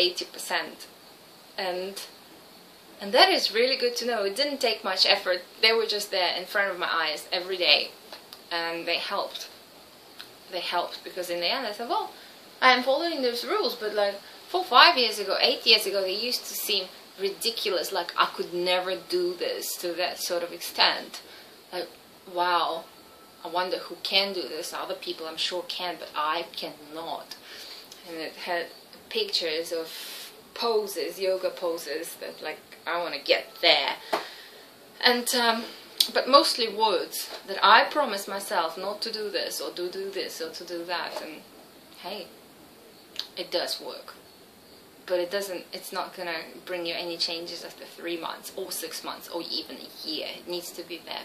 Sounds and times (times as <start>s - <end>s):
Speech: 0.0s - 0.9s, 1.6s - 2.1s, 3.0s - 9.5s, 10.5s - 21.2s, 21.8s - 27.4s, 28.0s - 34.0s, 35.0s - 41.4s, 42.0s - 42.3s, 43.2s - 44.2s, 45.1s - 51.2s
Inside, small room: 0.0s - 51.2s.